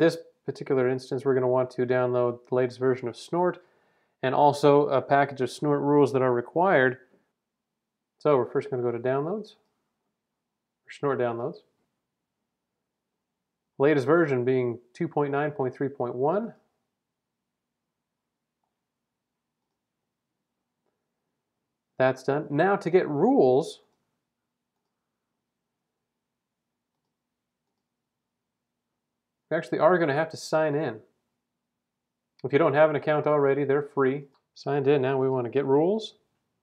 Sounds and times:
Speech: 0:00.0 - 0:03.6, 0:04.2 - 0:07.1, 0:08.2 - 0:09.6, 0:10.9 - 0:11.7, 0:13.8 - 0:16.7, 0:22.0 - 0:23.9, 0:29.5 - 0:31.1, 0:32.4 - 0:36.3.

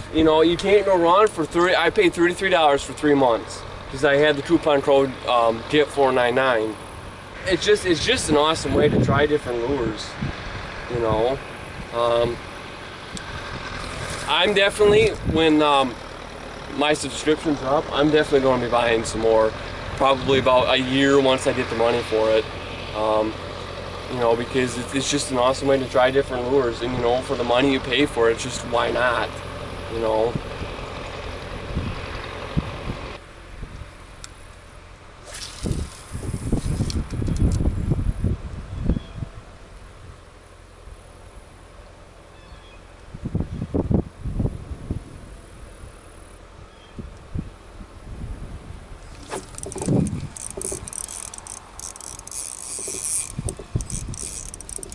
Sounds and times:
Outside, rural or natural: 0:00.0 - 0:54.9
Wind: 0:00.0 - 0:54.9.

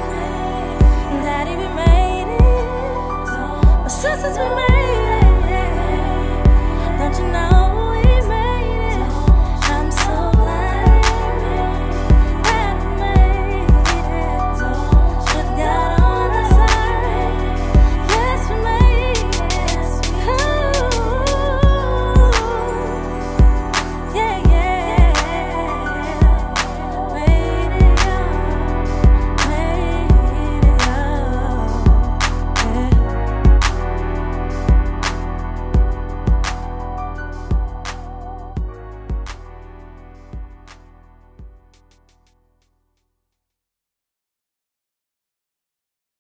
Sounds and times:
Hip hop music: 0:00.0 - 0:42.4.

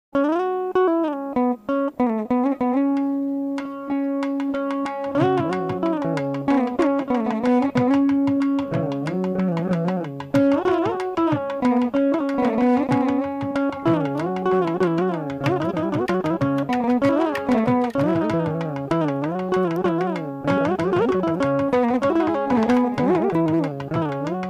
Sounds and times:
Carnatic music: 0:00.2 - 0:24.4
Musical instrument: 0:01.4 - 0:24.4.

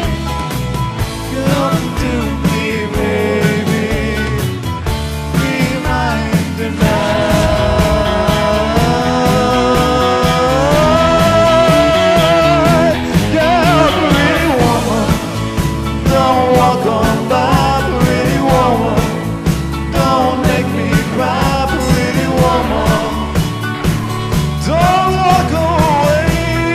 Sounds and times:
Drum kit: 0:00.0 - 0:26.7
Guitar: 0:00.0 - 0:26.7
Independent music: 0:00.0 - 0:26.7
Singing: 0:01.2 - 0:26.7.

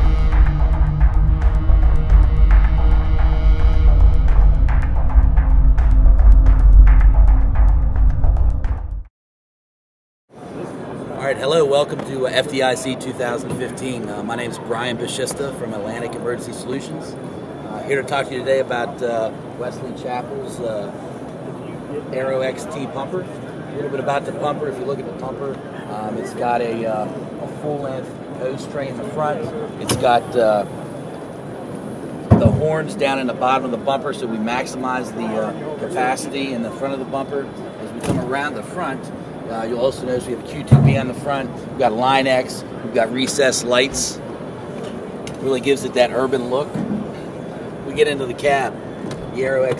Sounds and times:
Speech: 0:10.5 - 0:21.0, 0:21.6 - 0:30.7, 0:32.3 - 0:44.2, 0:45.4 - 0:46.8, 0:47.9 - 0:49.7.

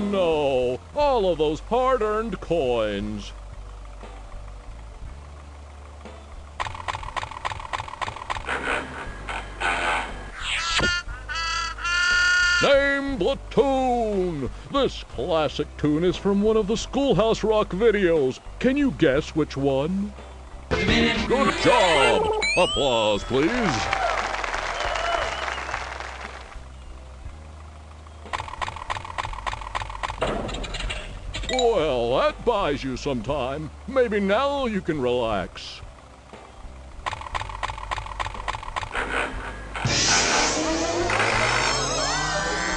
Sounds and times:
Music: 0:00.0 - 0:42.7.

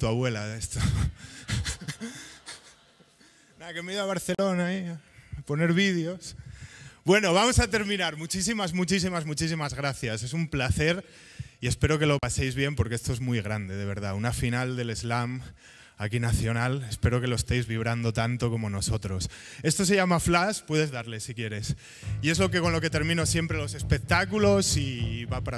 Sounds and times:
Speech: 0:00.0 - 0:01.1, 0:03.6 - 0:06.4, 0:07.1 - 0:11.0, 0:11.6 - 0:25.5.

